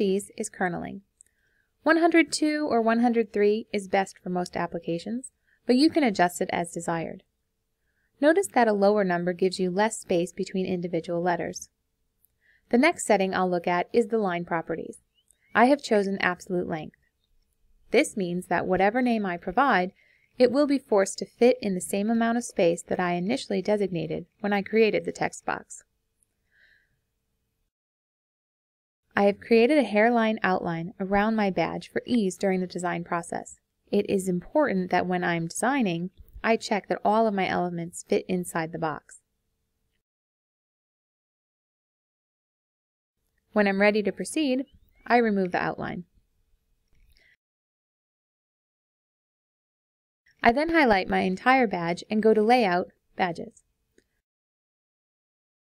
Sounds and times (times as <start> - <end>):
Speech: 0.0 - 1.1, 1.9 - 7.2, 8.2 - 11.7, 12.7 - 15.0, 15.6 - 17.0, 17.9 - 25.8, 29.2 - 39.2, 43.6 - 46.1, 50.4 - 53.6.